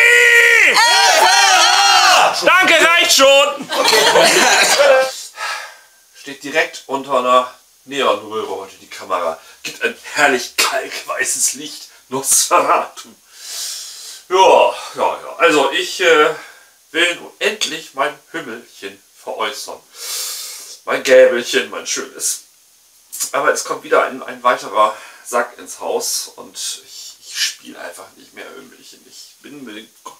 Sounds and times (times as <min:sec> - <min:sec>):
Speech: 0:02.3 - 0:05.4, 0:06.2 - 0:13.2, 0:14.3 - 0:19.9, 0:20.7 - 0:22.5, 0:23.2 - 0:30.1.